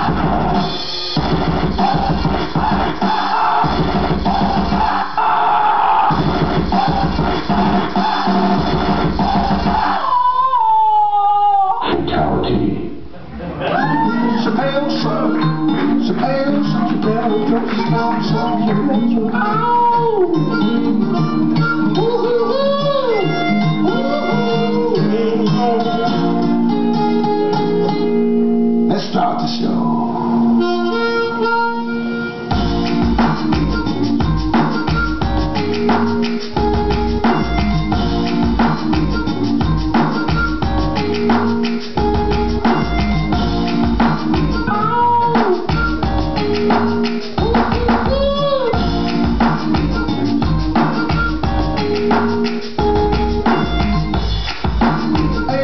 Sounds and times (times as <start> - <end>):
Music: 0.0 - 10.4, 12.6 - 55.6
Inside, large room or hall: 0.0 - 55.6.